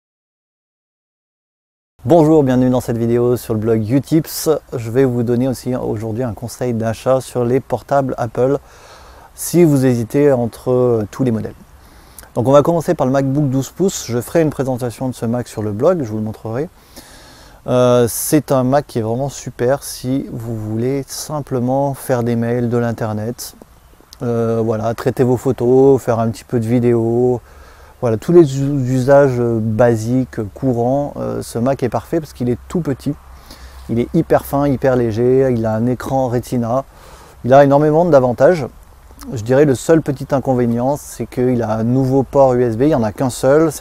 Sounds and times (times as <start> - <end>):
Speech: 2.0 - 8.6, 9.4 - 11.6, 12.3 - 16.7, 17.6 - 23.6, 24.2 - 27.4, 28.0 - 33.2, 33.9 - 43.8.